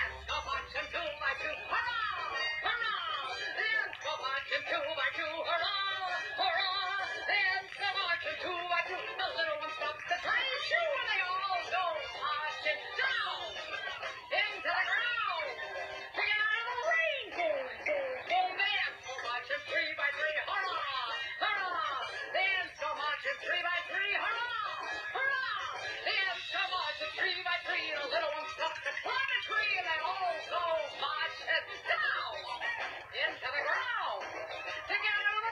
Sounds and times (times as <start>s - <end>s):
Music: 0.0s - 35.5s.